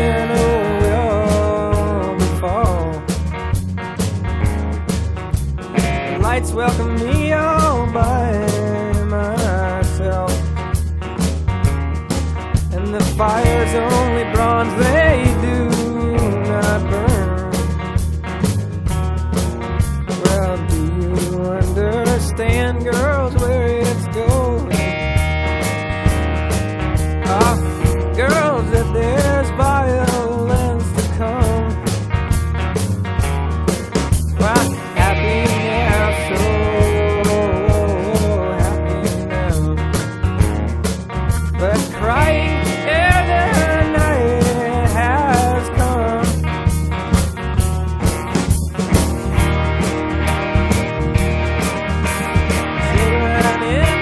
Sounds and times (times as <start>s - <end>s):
Music: 0.0s - 54.0s.